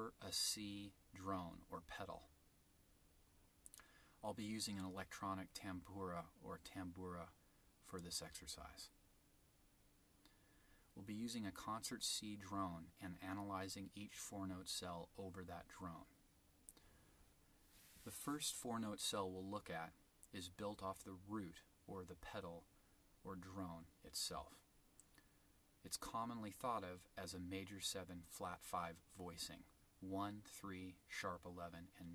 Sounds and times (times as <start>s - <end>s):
Speech: 0.0s - 2.3s, 4.2s - 9.0s, 10.9s - 16.2s, 18.0s - 24.7s, 25.8s - 32.1s.